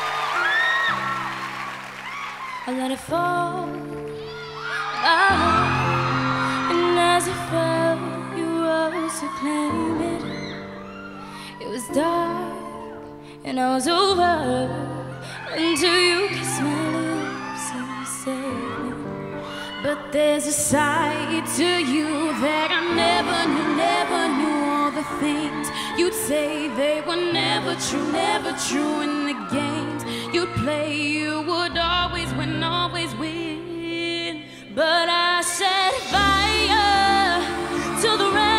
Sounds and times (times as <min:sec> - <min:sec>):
Music: 0:00.0 - 0:38.5.